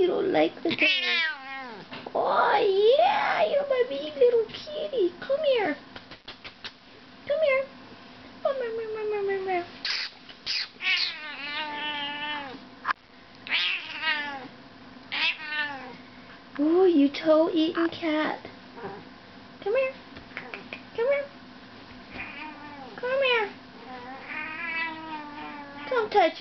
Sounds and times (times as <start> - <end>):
Speech: 0.0 - 0.9, 2.1 - 5.8, 7.3 - 7.8, 8.4 - 9.7, 16.6 - 18.6, 19.6 - 21.4, 23.0 - 23.6, 25.8 - 26.4.